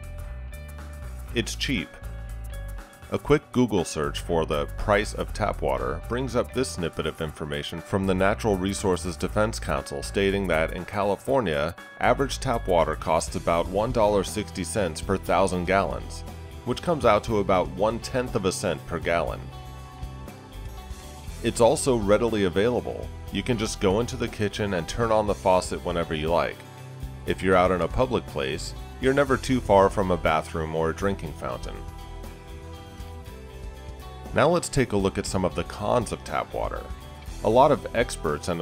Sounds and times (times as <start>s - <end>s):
Music: 0.0s - 38.6s
Speech: 1.3s - 2.0s, 3.1s - 19.5s, 21.4s - 26.6s, 27.3s - 31.8s, 34.3s - 38.6s.